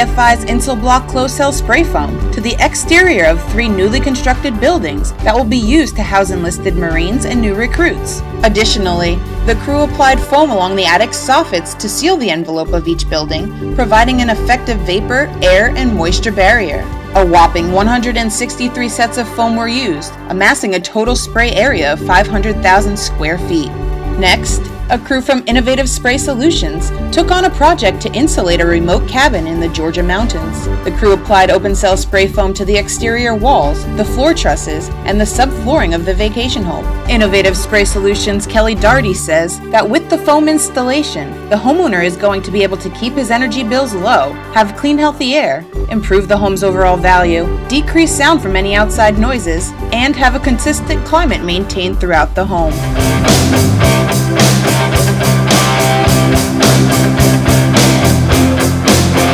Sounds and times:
Speech: 0:00.0 - 0:52.9
Music: 0:00.0 - 0:59.3.

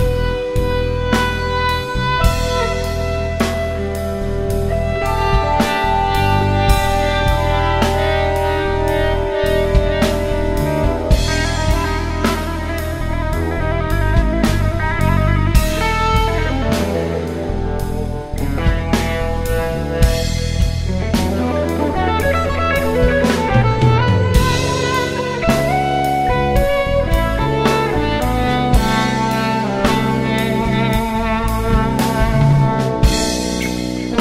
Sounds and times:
Inside, small room: 0:00.0 - 0:34.2
Music: 0:00.0 - 0:34.2.

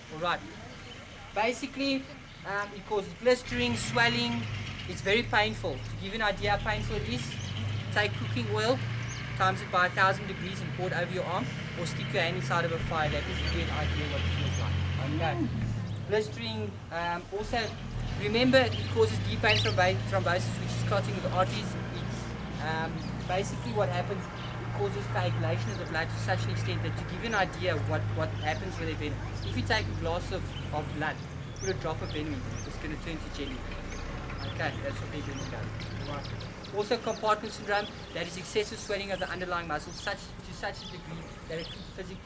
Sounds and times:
Speech: 0:00.0 - 0:08.8, 0:09.4 - 0:33.6, 0:34.4 - 0:42.2
Outside, rural or natural: 0:00.0 - 0:42.2.

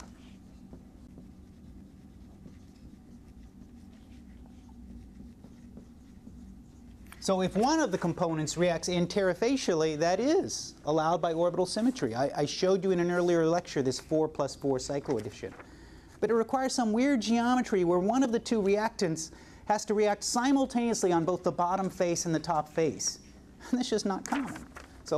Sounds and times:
Writing: 0:00.0 - 0:09.6
Speech: 0:07.2 - 0:15.6, 0:16.2 - 0:25.1.

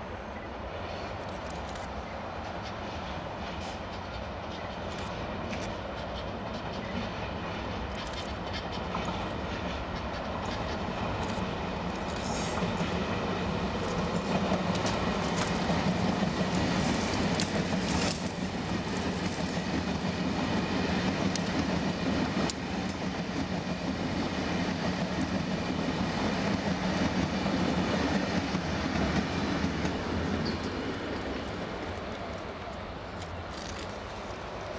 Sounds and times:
Railroad car, train wagon: 0:00.0 - 0:34.7
Train: 0:00.0 - 0:34.7.

